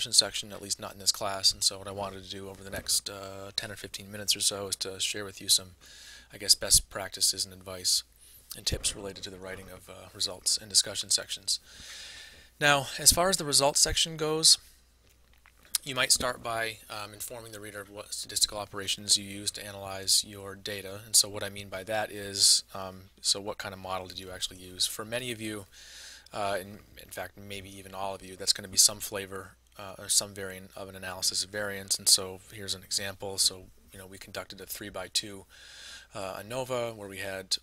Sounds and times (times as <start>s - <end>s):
Speech: 0.0s - 11.6s, 12.6s - 14.6s, 15.8s - 25.7s, 26.3s - 35.5s, 36.1s - 37.6s.